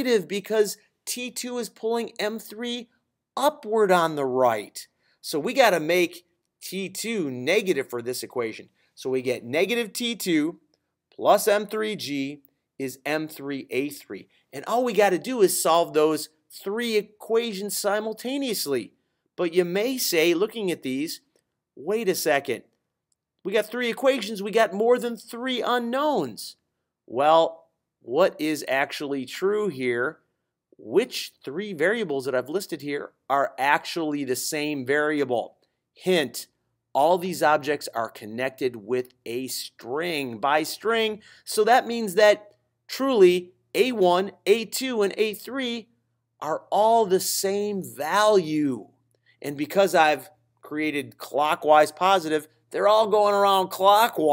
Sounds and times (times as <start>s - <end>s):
Speech: 0.0s - 10.6s, 11.2s - 22.7s, 23.4s - 30.2s, 30.8s - 54.3s.